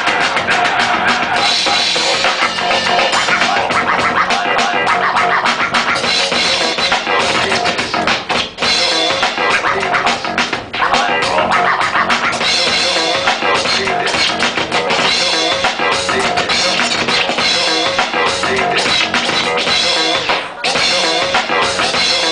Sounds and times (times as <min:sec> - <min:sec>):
Scratching (performance technique): 0:00.0 - 0:22.3.